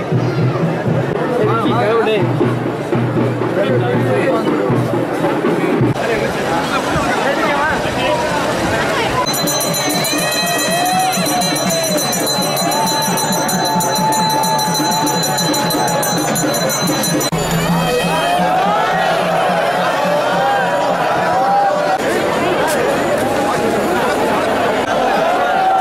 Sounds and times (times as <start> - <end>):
Speech: 0.0 - 2.6, 3.4 - 13.9, 17.9 - 25.8
Music: 0.0 - 6.0, 9.3 - 22.2.